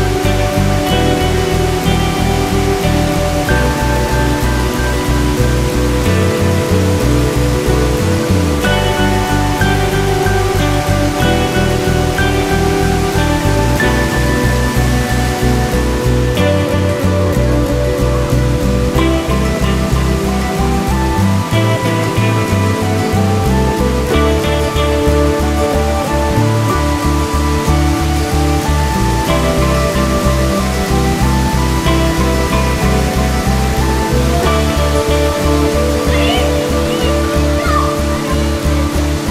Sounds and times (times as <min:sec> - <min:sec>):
Music: 0:00.0 - 0:39.3
Waterfall: 0:00.0 - 0:39.3.